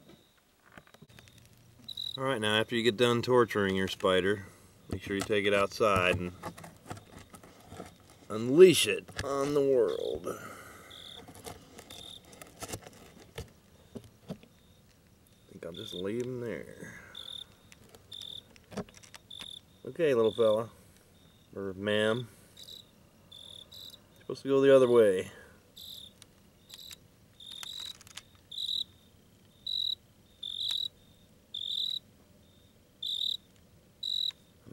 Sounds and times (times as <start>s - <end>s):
Insect: 0.0s - 34.7s
Speech: 2.2s - 6.3s, 8.3s - 10.3s, 15.5s - 17.0s, 19.9s - 20.7s, 21.6s - 22.3s, 24.3s - 25.5s.